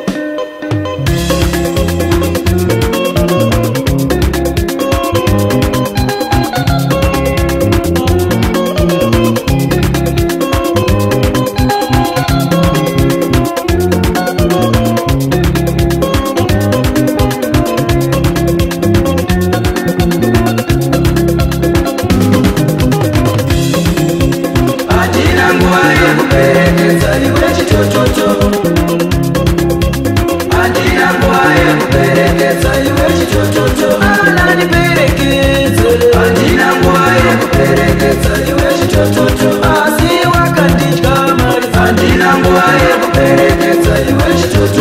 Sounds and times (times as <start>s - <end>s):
Music: 0.0s - 44.8s.